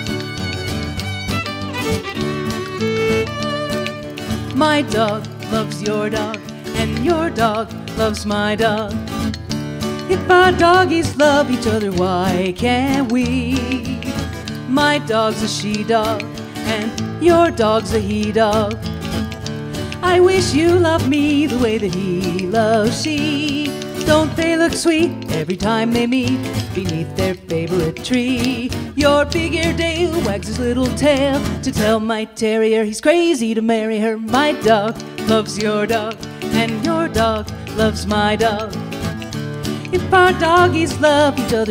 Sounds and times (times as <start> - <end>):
Music: 0.0 - 41.7.